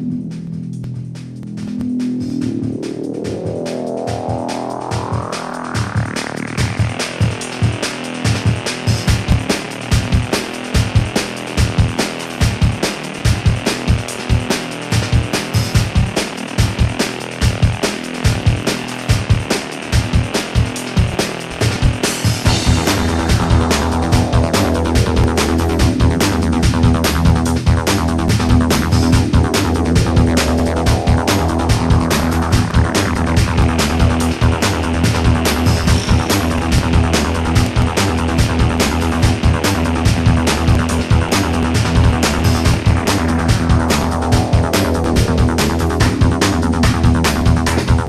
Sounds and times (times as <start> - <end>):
Music: 0.0 - 48.0.